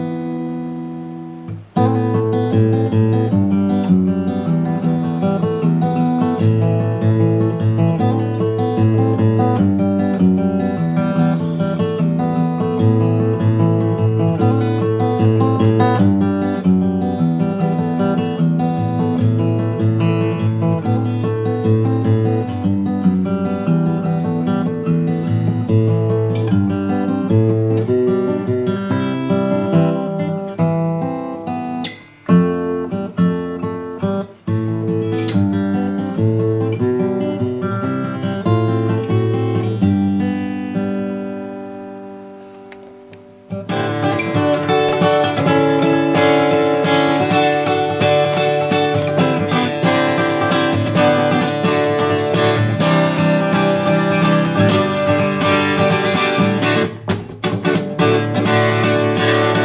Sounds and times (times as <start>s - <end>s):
Strum: 0.0s - 59.6s.